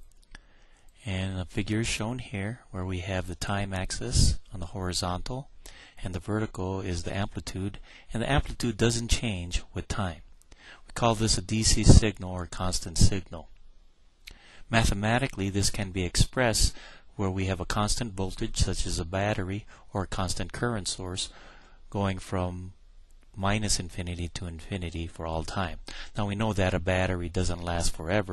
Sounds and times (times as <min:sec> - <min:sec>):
Speech: 0:01.0 - 0:10.3, 0:10.9 - 0:13.5, 0:14.7 - 0:22.8, 0:23.4 - 0:28.3.